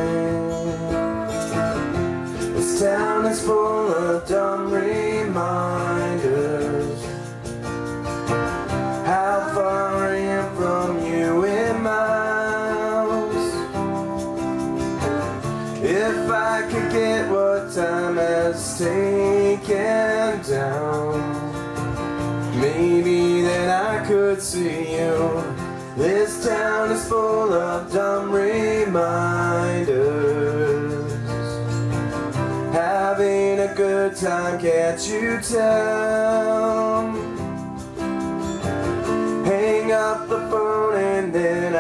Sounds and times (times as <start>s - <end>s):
Acoustic guitar: 0.0s - 41.8s.